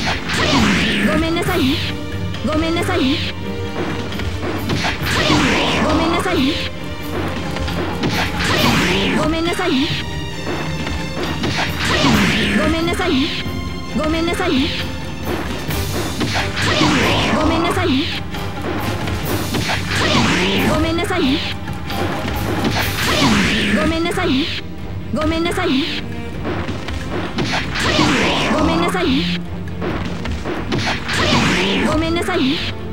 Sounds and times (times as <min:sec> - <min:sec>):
Music: 0:00.0 - 0:32.9
Speech: 0:00.9 - 0:03.3, 0:05.7 - 0:06.7, 0:08.8 - 0:10.0, 0:12.4 - 0:14.8, 0:17.1 - 0:18.2, 0:20.4 - 0:21.5, 0:23.6 - 0:26.0, 0:28.3 - 0:29.4, 0:31.6 - 0:32.7.